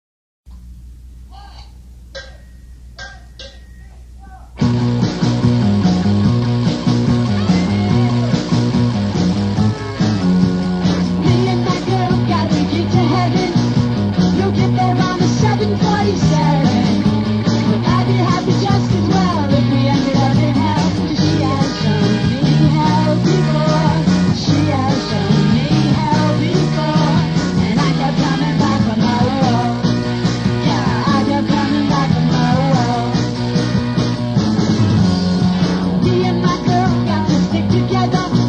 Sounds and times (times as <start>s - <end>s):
Speech: 1.3s - 1.8s, 3.8s - 4.6s
Psychedelic rock: 4.6s - 38.4s.